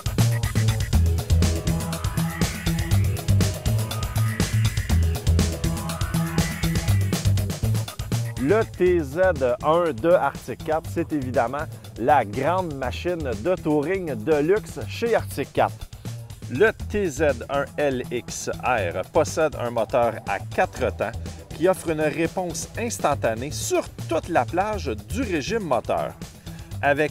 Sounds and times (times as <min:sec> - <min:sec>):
Music: 0:00.0 - 0:27.1
Speech: 0:08.4 - 0:15.8, 0:16.5 - 0:26.2, 0:26.8 - 0:27.1.